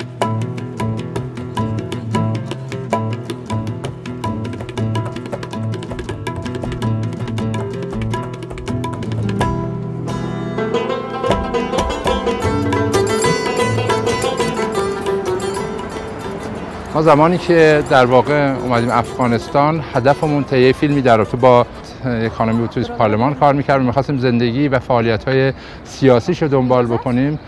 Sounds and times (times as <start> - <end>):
Banjo: 0.0 - 23.7
Bluegrass: 0.0 - 24.2.